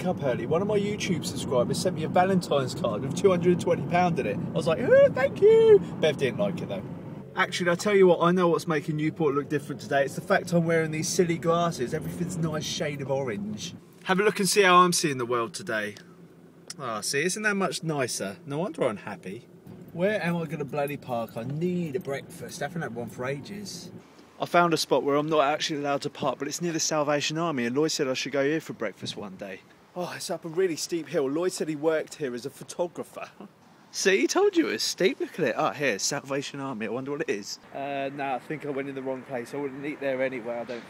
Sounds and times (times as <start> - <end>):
Speech: 7.4 - 16.0, 16.7 - 19.4, 20.0 - 40.8.